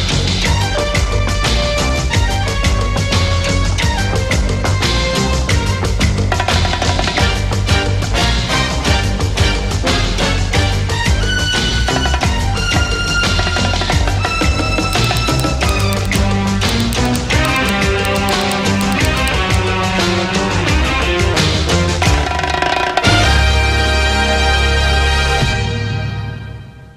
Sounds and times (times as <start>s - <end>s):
Music: 22.3s - 26.9s.